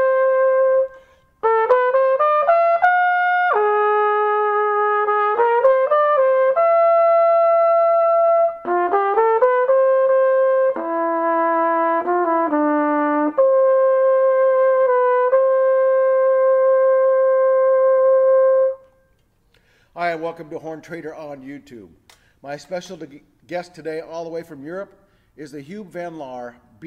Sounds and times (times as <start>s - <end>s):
Trumpet: 0.0s - 19.1s.